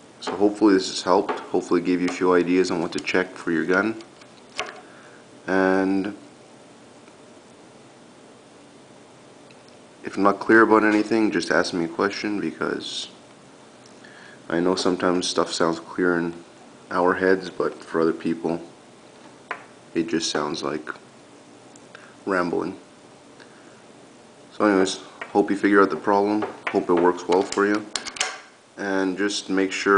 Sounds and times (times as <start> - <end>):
Inside, small room: 0.0 - 29.9
Speech: 0.2 - 4.0, 5.5 - 6.2, 10.0 - 13.2, 14.5 - 18.8, 20.0 - 21.0, 22.2 - 22.9, 24.5 - 28.0, 28.8 - 29.9.